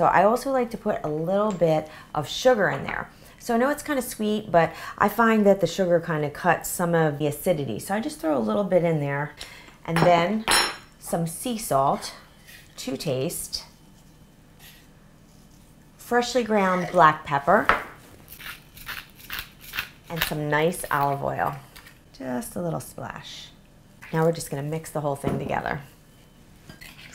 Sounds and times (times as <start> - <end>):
Speech: 0.0 - 12.2, 12.8 - 13.7, 16.0 - 17.7, 20.1 - 21.6, 22.2 - 25.9.